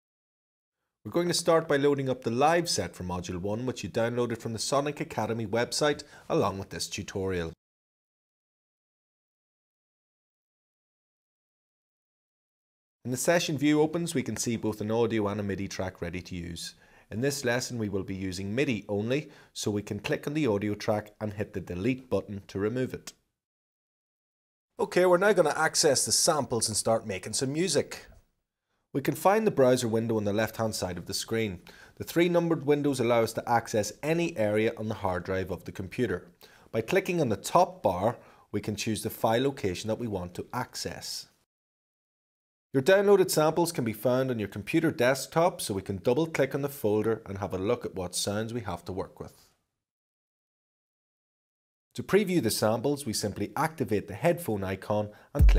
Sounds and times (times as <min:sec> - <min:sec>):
Speech: 0:01.1 - 0:07.6, 0:13.1 - 0:23.2, 0:24.8 - 0:28.2, 0:29.0 - 0:41.4, 0:42.8 - 0:49.5, 0:52.0 - 0:55.5.